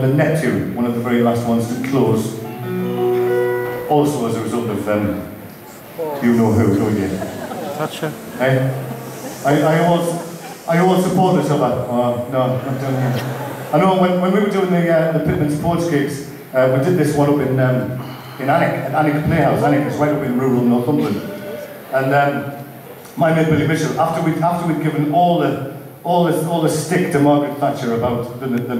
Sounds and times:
Speech: 0.0 - 2.4, 3.9 - 8.8, 9.4 - 22.6, 23.2 - 28.7.

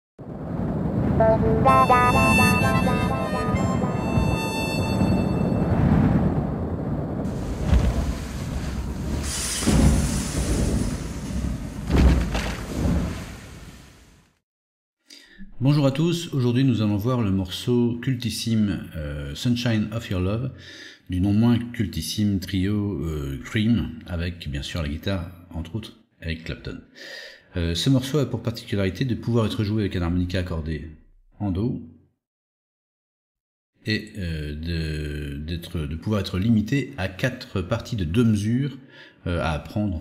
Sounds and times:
Harmonica: 1.2 - 5.7
Wind instrument, woodwind instrument: 1.2 - 5.9.

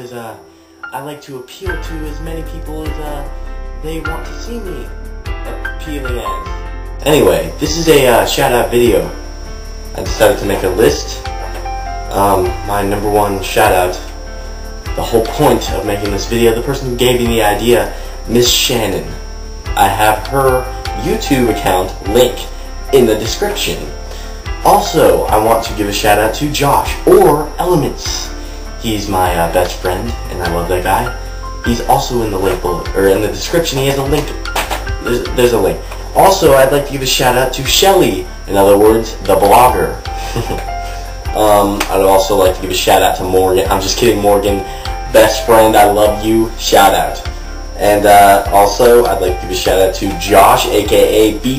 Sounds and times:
Speech: 0.0 - 4.9, 5.5 - 6.4, 7.0 - 9.2, 10.0 - 11.3, 12.1 - 14.2, 15.0 - 24.0, 24.6 - 34.4, 35.0 - 40.0, 41.3 - 51.5
Music: 0.0 - 51.5.

